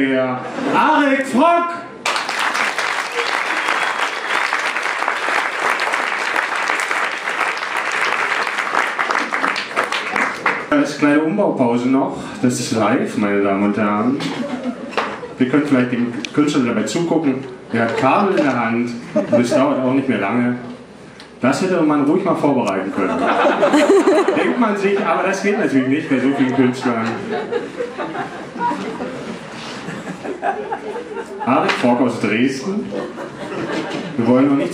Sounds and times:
Speech: 0.0 - 1.9, 10.7 - 14.3, 15.4 - 20.7, 21.4 - 23.2, 24.4 - 27.3, 31.5 - 33.0, 34.2 - 34.7.

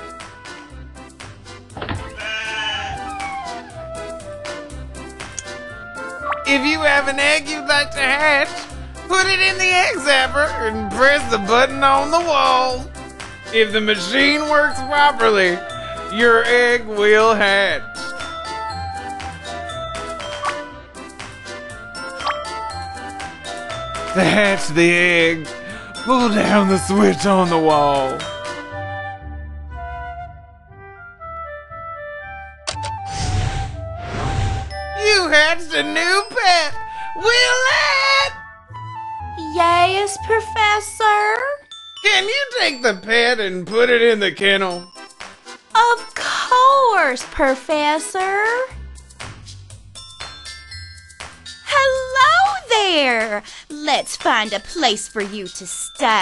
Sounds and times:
Music: 0.0 - 56.2
Speech: 26.1 - 28.2, 39.4 - 44.8, 45.8 - 48.7, 51.7 - 56.2.

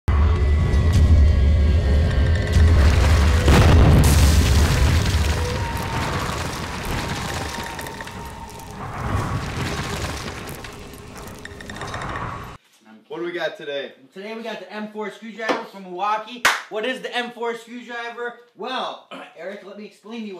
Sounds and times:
Music: 0.1 - 3.7.

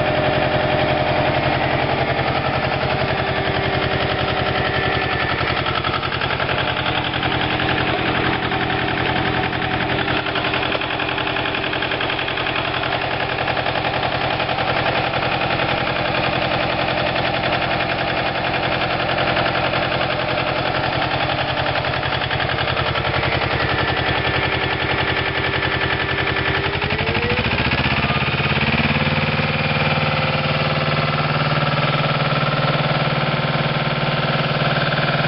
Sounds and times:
Vibration: 0.0 - 33.3
Engine: 0.0 - 35.2.

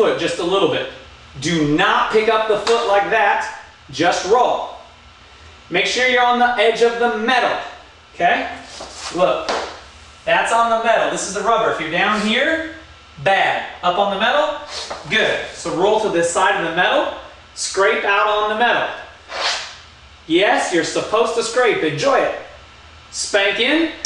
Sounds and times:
Speech: 0.0 - 4.9, 5.7 - 9.6, 10.2 - 19.1, 20.3 - 24.0.

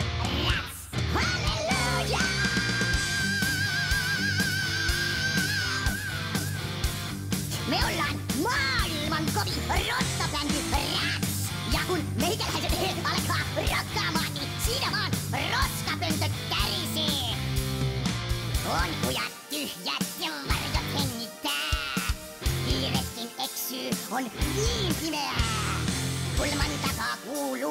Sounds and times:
Music: 0.0 - 27.7
Speech: 7.5 - 17.4, 18.6 - 27.7.

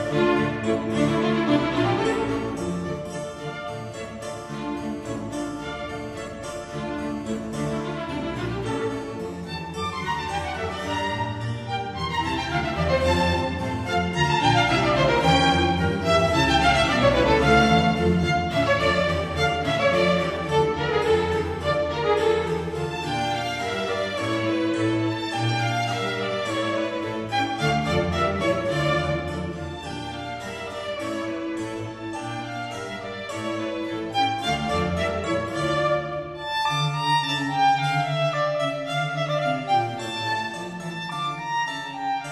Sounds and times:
Violin, fiddle: 0.0 - 42.3.

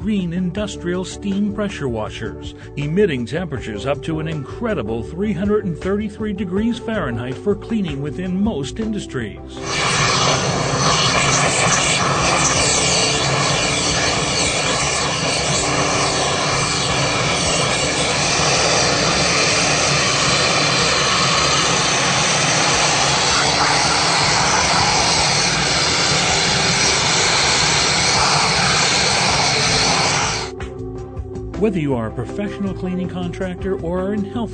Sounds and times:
Speech: 0.0 - 9.6, 31.6 - 34.5
Music: 0.0 - 34.5
Steam: 9.6 - 30.6.

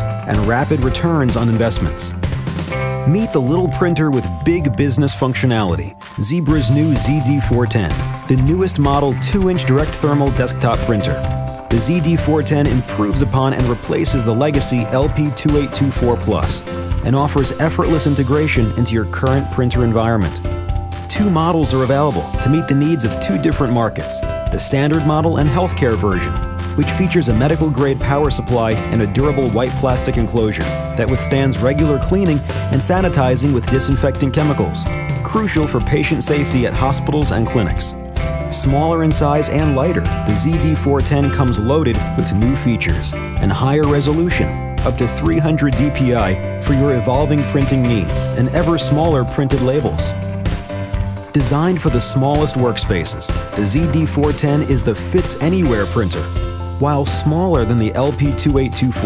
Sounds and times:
Speech: 0.0 - 2.2, 3.1 - 20.4, 21.1 - 50.2, 51.3 - 59.0
Music: 0.0 - 59.0.

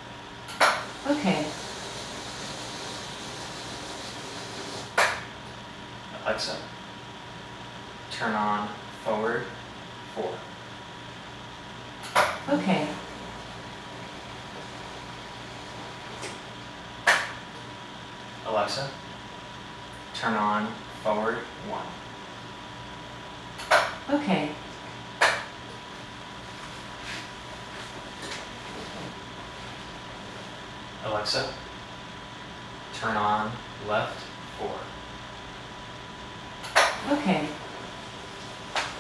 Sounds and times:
Speech: 1.0 - 1.6, 6.2 - 6.7, 8.1 - 10.5, 12.5 - 13.1, 18.4 - 19.0, 20.2 - 22.0, 24.1 - 24.6, 31.0 - 31.6, 32.9 - 35.0, 37.0 - 37.6.

